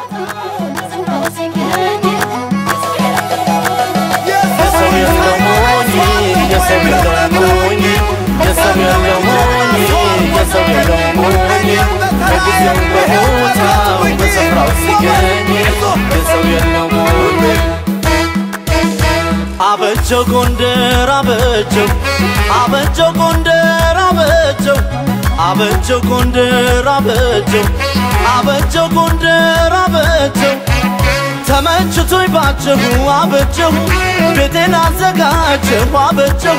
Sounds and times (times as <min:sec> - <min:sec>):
Music: 0:00.0 - 0:36.5.